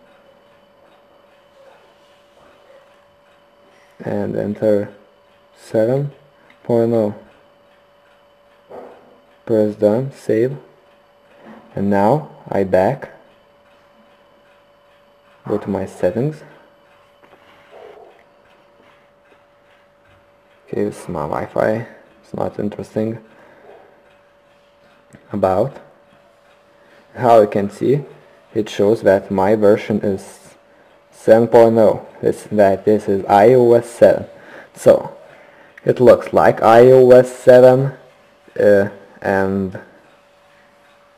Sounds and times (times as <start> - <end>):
Inside, small room: 0.0 - 41.1
Speech: 4.0 - 5.0, 5.6 - 7.3, 9.4 - 10.8, 11.7 - 13.3, 15.4 - 16.6, 20.7 - 23.3, 25.2 - 25.9, 27.1 - 40.0.